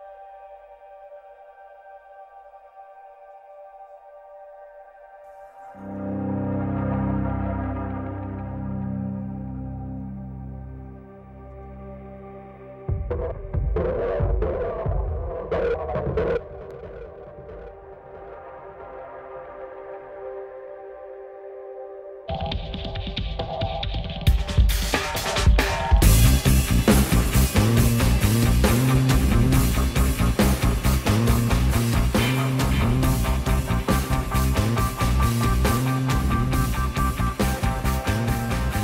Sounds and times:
Music: 0.0s - 38.8s.

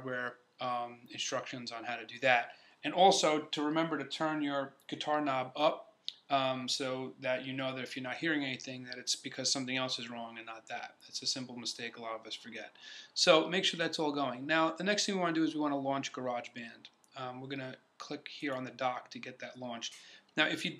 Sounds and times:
Speech: 0.0s - 20.7s.

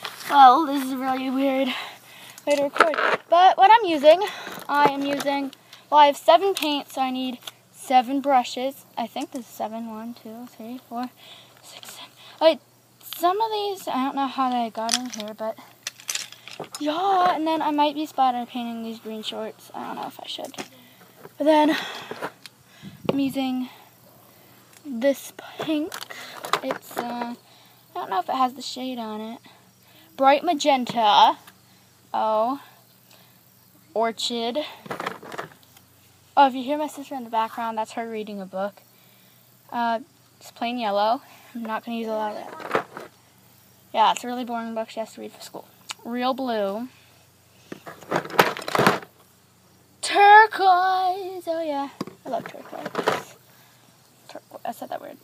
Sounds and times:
Speech: 0.3s - 1.8s, 2.4s - 15.6s, 16.8s - 20.8s, 26.6s - 27.4s, 28.0s - 29.4s, 32.2s - 32.6s, 36.4s - 38.8s, 39.7s - 42.7s, 43.9s - 46.9s, 50.0s - 53.3s, 54.3s - 55.2s.

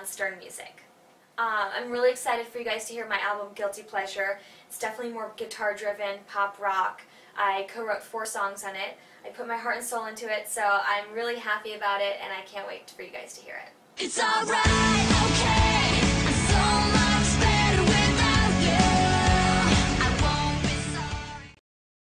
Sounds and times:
Speech: 0.0s - 13.8s
Music: 14.0s - 21.6s.

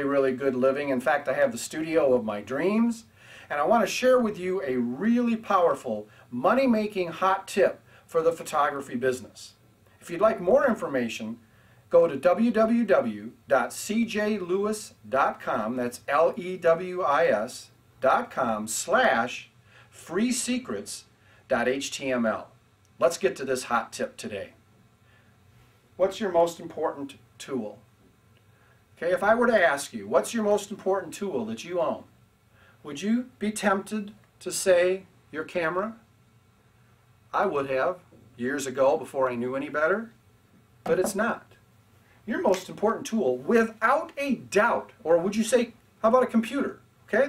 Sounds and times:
Speech: 0.0s - 24.6s, 26.0s - 27.9s, 29.0s - 32.1s, 32.8s - 36.1s, 37.3s - 40.2s, 40.9s - 41.6s, 42.3s - 47.2s.

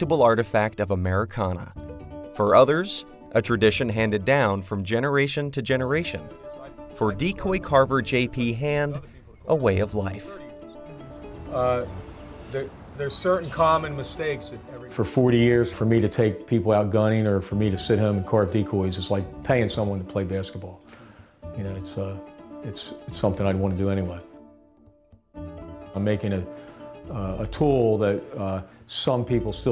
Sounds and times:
Speech: 0.0s - 1.8s, 2.4s - 10.6s, 12.5s - 20.8s, 21.6s - 24.2s, 26.0s - 26.5s, 27.1s - 29.7s
Music: 0.0s - 29.7s.

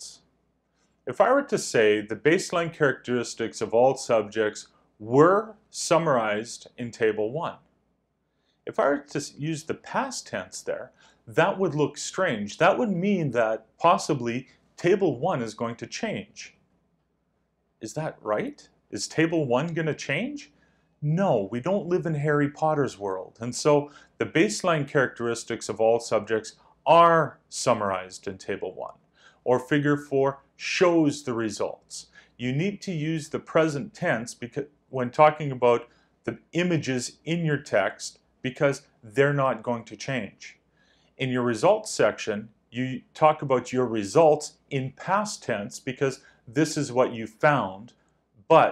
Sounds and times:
Speech: 0.0s - 0.3s, 1.0s - 7.7s, 8.6s - 16.6s, 17.8s - 40.6s, 41.2s - 48.7s.

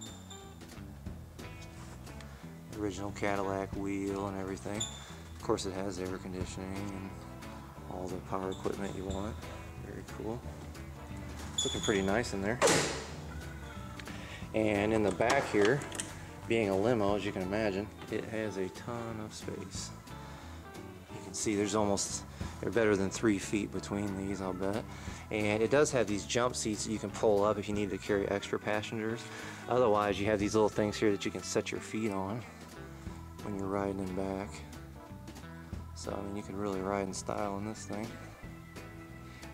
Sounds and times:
Door: 12.6s - 13.2s.

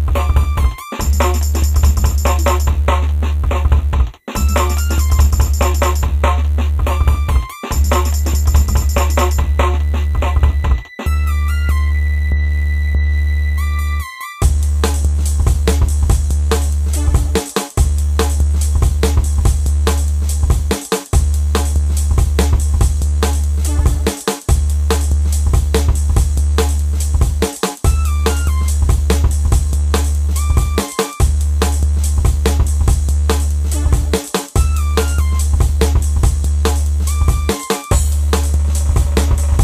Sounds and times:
Drum kit: 0.0s - 11.1s, 14.4s - 39.6s.

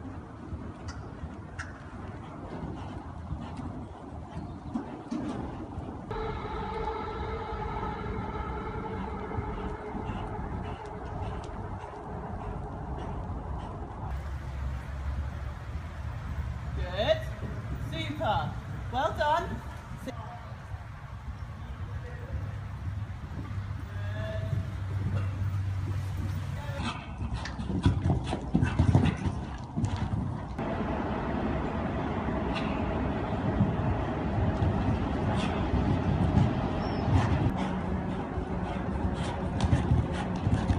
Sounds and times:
Clip-clop: 0.0s - 7.1s, 8.6s - 30.6s, 32.4s - 40.7s
Speech: 16.8s - 20.5s.

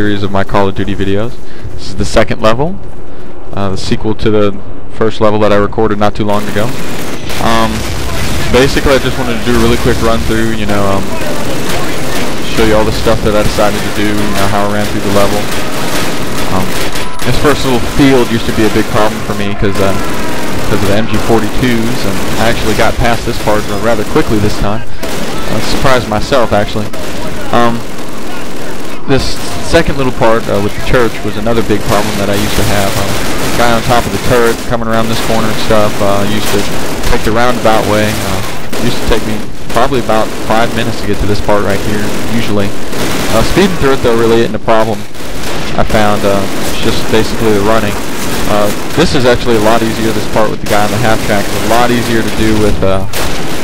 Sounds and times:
Speech: 0.0s - 2.8s, 3.6s - 6.7s, 7.4s - 15.6s, 16.5s - 20.1s, 20.7s - 45.0s, 45.7s - 53.1s.

